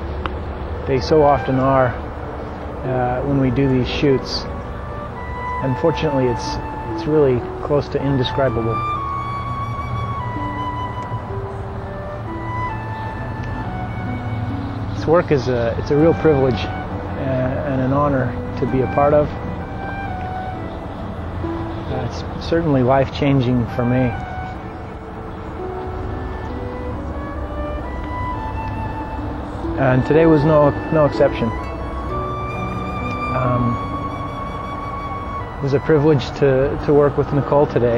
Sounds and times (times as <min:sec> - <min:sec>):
Music: 0:00.0 - 0:37.9
Speech: 0:00.9 - 0:02.0, 0:02.8 - 0:04.5, 0:15.0 - 0:19.3, 0:21.9 - 0:24.2, 0:29.8 - 0:31.5, 0:33.3 - 0:33.7, 0:35.6 - 0:37.9.